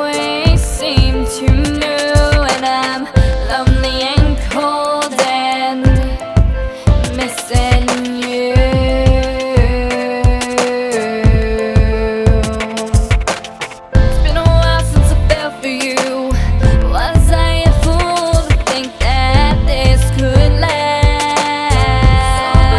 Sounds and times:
Music: 0:00.0 - 0:22.7.

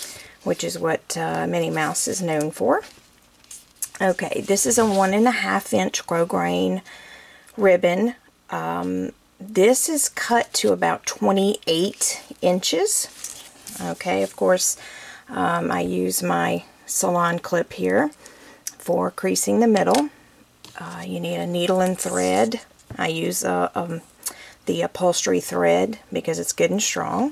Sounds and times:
Speech: 0:00.4 - 0:02.9, 0:03.9 - 0:06.8, 0:07.6 - 0:18.2, 0:18.8 - 0:20.1, 0:20.7 - 0:24.0, 0:24.7 - 0:27.3.

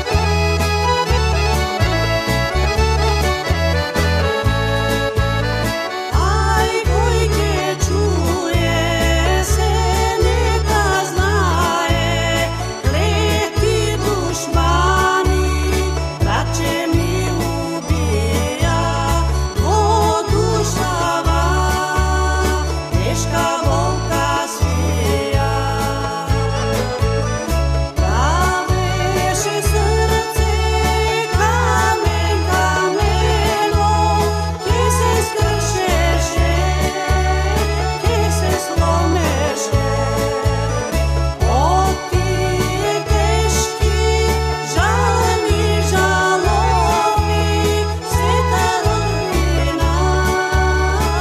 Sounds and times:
Folk music: 0:00.0 - 0:51.2
Singing: 0:06.1 - 0:26.9, 0:28.1 - 0:51.2.

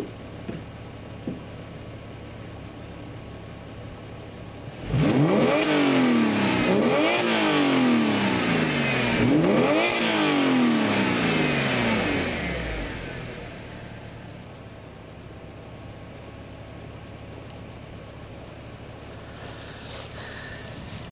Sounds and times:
Car: 0:00.0 - 0:21.1
Accelerating, revving, vroom: 0:04.7 - 0:13.5.

